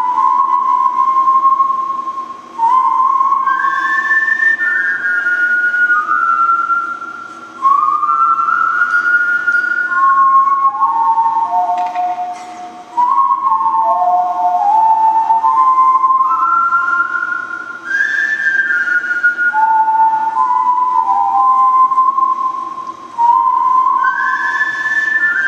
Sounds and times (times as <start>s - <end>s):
Whistling: 0.0s - 25.4s.